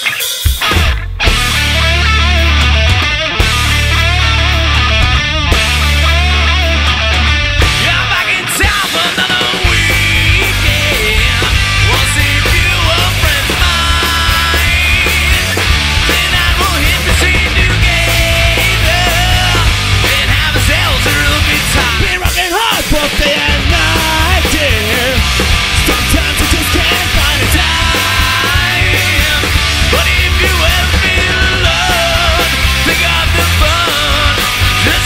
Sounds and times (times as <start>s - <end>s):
Heavy metal: 0.0s - 35.0s
Progressive rock: 0.0s - 35.0s
Punk rock: 0.0s - 35.0s
Rock and roll: 0.0s - 35.0s.